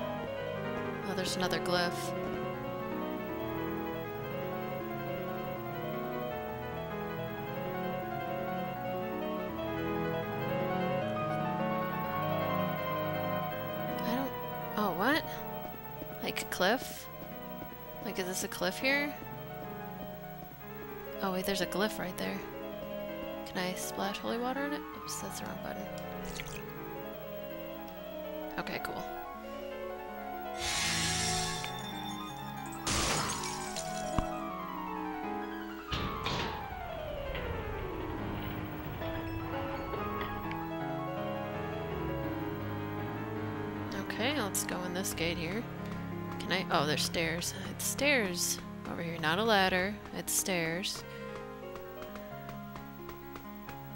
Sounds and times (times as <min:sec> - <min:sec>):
Music: 0:00.0 - 0:53.9.